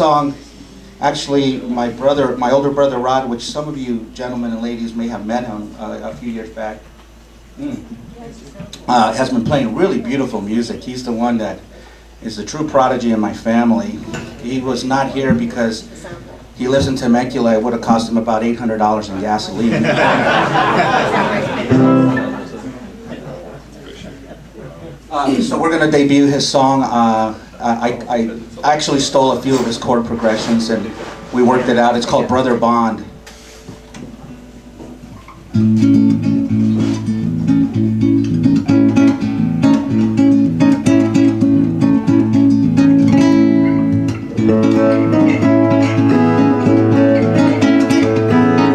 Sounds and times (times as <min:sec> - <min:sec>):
Speech: 0:00.0 - 0:00.4, 0:01.0 - 0:06.9, 0:07.6 - 0:20.0, 0:23.1 - 0:33.1
Strum: 0:21.5 - 0:23.0, 0:29.4 - 0:48.7.